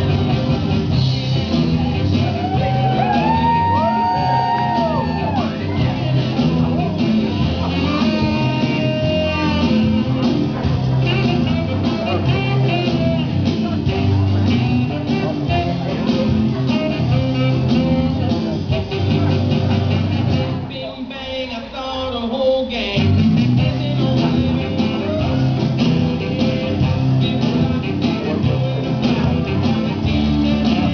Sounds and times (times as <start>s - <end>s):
Music: 0.0s - 30.9s
Speech: 4.7s - 30.9s.